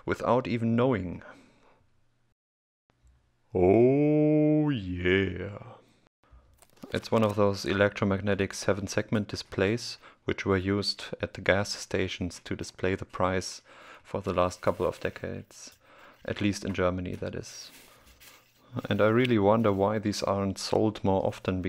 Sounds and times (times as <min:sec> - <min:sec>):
Speech: 0:00.0 - 0:01.4, 0:03.6 - 0:05.8, 0:06.9 - 0:17.8, 0:18.7 - 0:21.6.